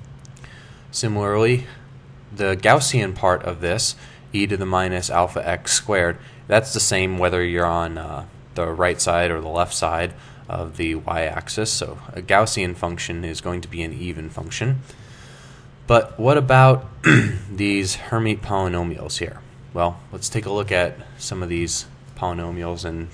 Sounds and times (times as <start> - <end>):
Speech: 0.9 - 14.8, 15.9 - 23.1.